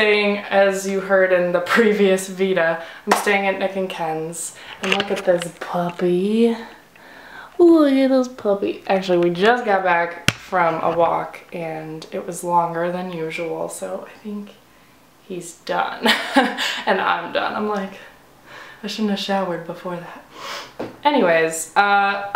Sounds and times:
Speech: 0:00.0 - 0:06.8, 0:07.6 - 0:14.6, 0:15.3 - 0:16.2, 0:16.9 - 0:18.2, 0:18.8 - 0:20.2, 0:21.0 - 0:22.3.

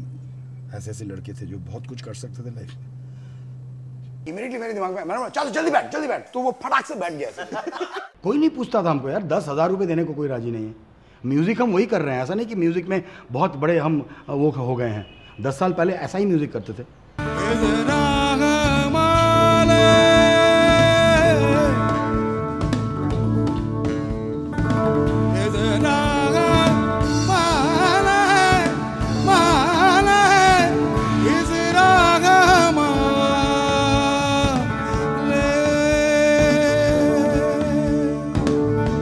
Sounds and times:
Speech: 0:00.7 - 0:02.8, 0:04.3 - 0:16.9
Music: 0:17.2 - 0:39.0.

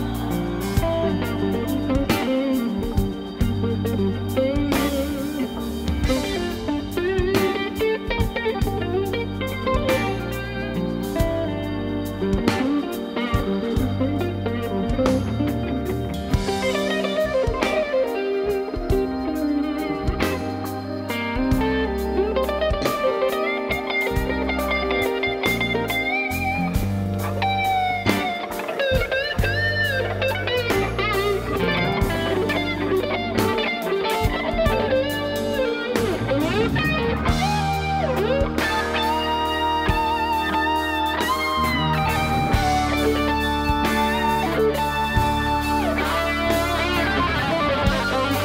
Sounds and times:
Electric guitar: 0:00.0 - 0:48.4.

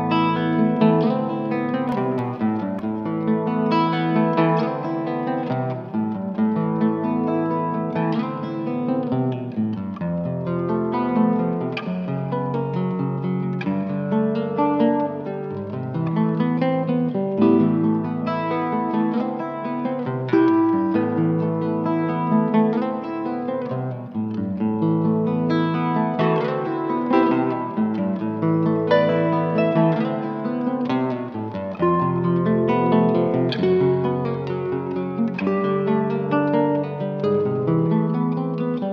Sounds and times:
Strum: 0:00.0 - 0:38.9.

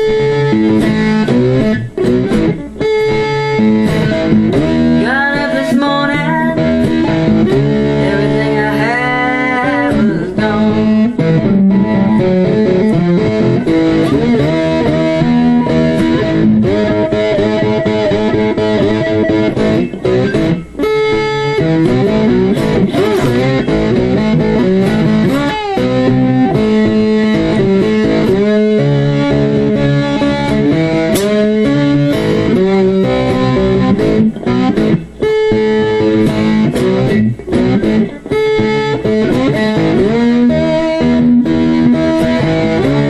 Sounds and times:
Electric guitar: 0:00.0 - 0:43.0.

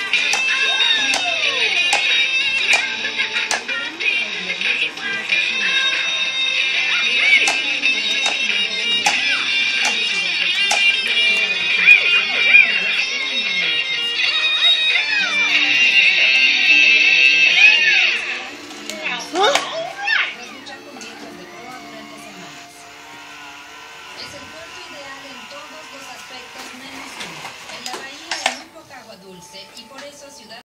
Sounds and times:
Music: 0:00.0 - 0:30.6
Speech: 0:03.0 - 0:22.8, 0:24.2 - 0:30.6.

